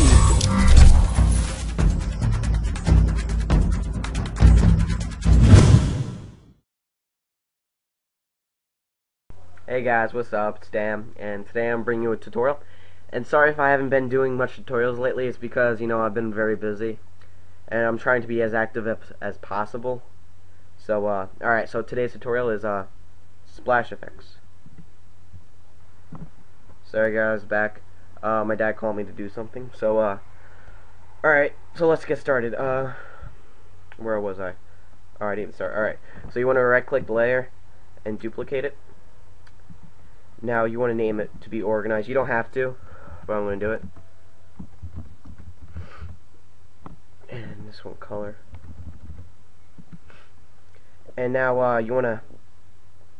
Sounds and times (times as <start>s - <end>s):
Speech: 9.6s - 17.0s, 17.7s - 20.1s, 20.8s - 22.9s, 23.5s - 24.4s, 26.8s - 30.2s, 31.2s - 33.1s, 34.0s - 34.6s, 35.2s - 38.8s, 40.4s - 43.9s, 47.3s - 48.4s, 51.1s - 52.4s.